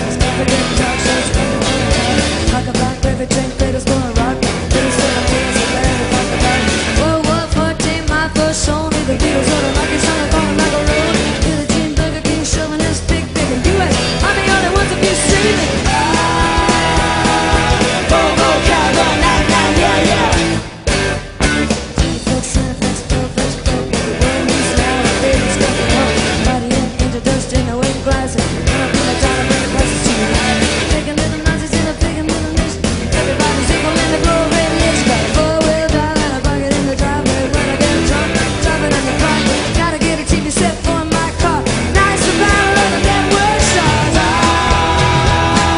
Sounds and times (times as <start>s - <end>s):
Music: 0.0s - 45.7s.